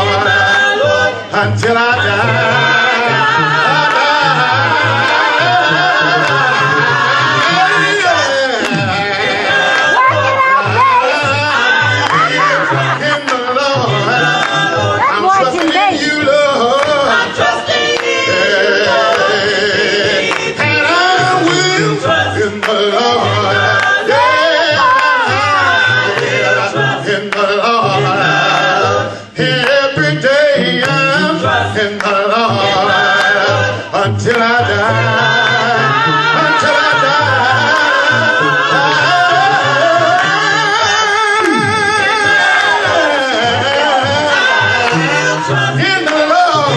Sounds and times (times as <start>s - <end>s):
Choir: 0.0s - 46.7s
Inside, large room or hall: 0.0s - 46.7s.